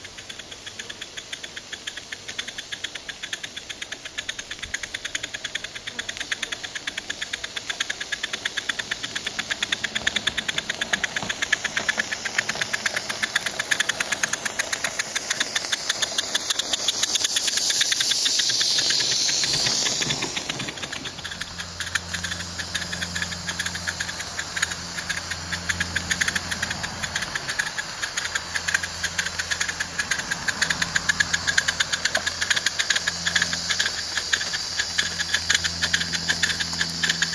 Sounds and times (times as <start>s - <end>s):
Train: 0.0s - 7.7s, 8.3s - 37.3s.